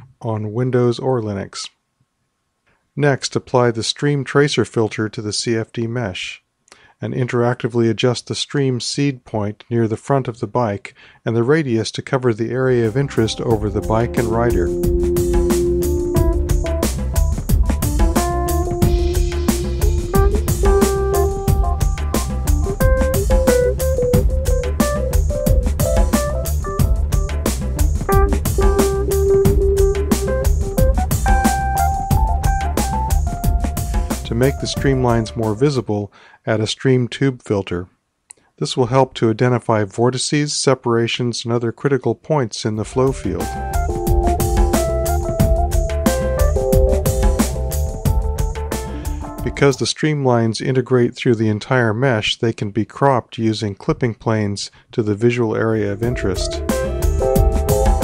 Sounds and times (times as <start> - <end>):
Speech synthesizer: 38.7 - 43.5.